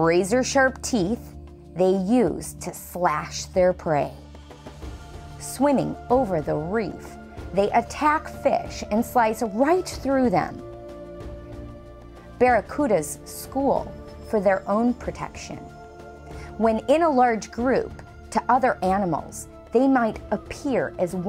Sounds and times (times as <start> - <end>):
Speech: 0.0 - 4.2, 5.4 - 10.6, 12.4 - 15.7, 16.6 - 21.2
Music: 0.0 - 21.2.